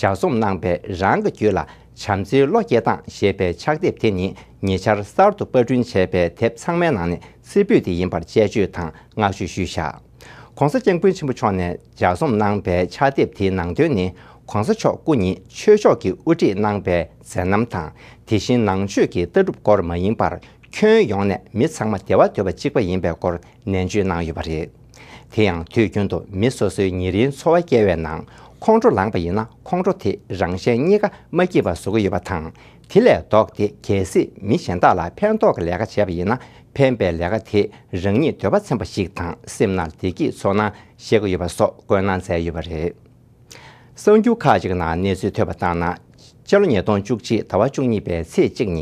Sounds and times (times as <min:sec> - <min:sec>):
Speech: 0:00.0 - 0:10.0, 0:10.6 - 0:43.1, 0:44.0 - 0:48.8.